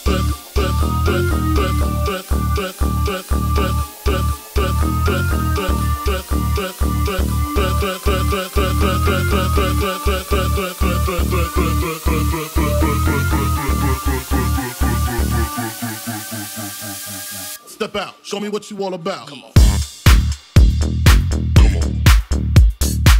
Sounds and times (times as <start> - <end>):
Music: 0.0 - 23.1.